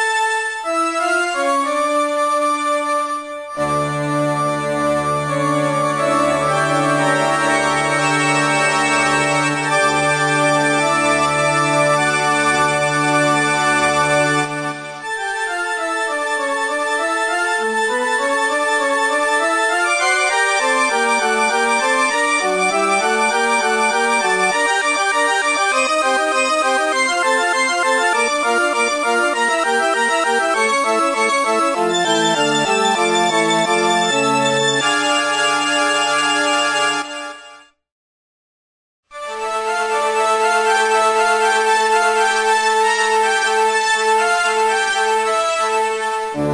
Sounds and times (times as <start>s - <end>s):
Music: 0.0s - 37.8s, 39.1s - 46.5s.